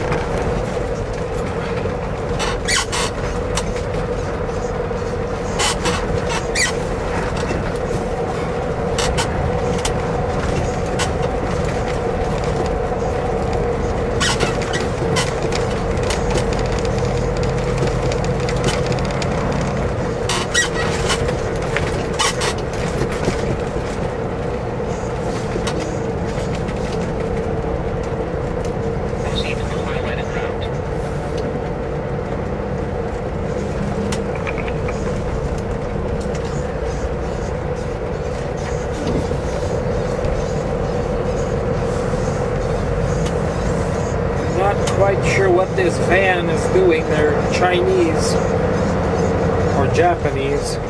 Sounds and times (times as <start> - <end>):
Outside, urban or manmade: 0.0 - 50.9
Truck: 0.0 - 50.9.